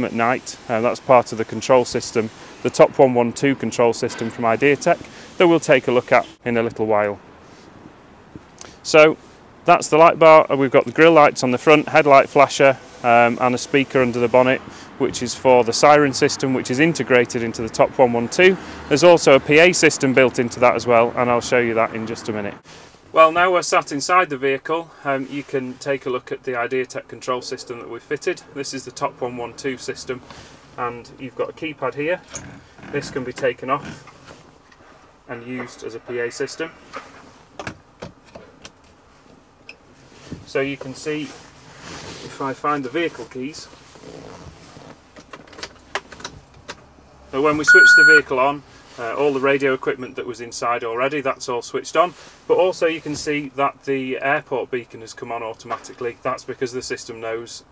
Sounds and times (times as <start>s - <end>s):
Speech: 0.0s - 7.2s, 8.8s - 30.2s, 30.8s - 32.3s, 32.9s - 34.0s, 35.3s - 36.8s, 40.5s - 41.4s, 42.2s - 43.8s, 47.3s - 57.7s.